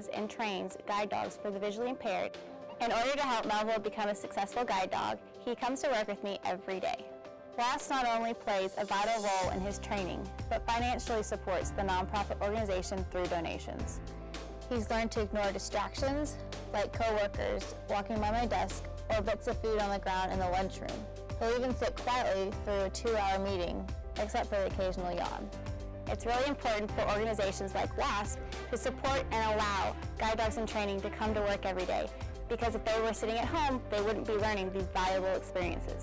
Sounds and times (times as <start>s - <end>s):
Speech: 0.0s - 7.0s, 7.6s - 14.0s, 14.7s - 25.5s, 26.1s - 36.0s
Music: 0.0s - 36.0s.